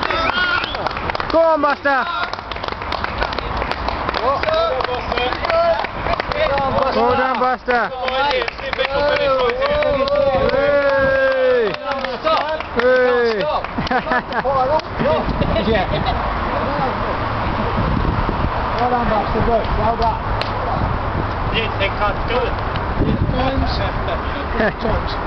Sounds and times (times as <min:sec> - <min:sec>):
Outside, urban or manmade: 0:00.0 - 0:25.2.